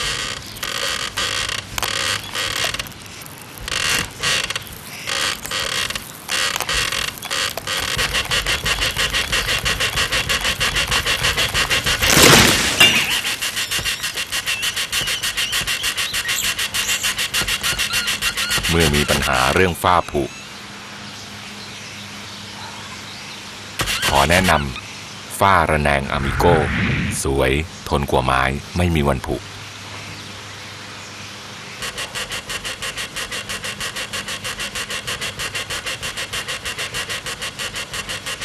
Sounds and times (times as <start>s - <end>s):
Speech: 18.7s - 20.3s, 24.1s - 29.5s.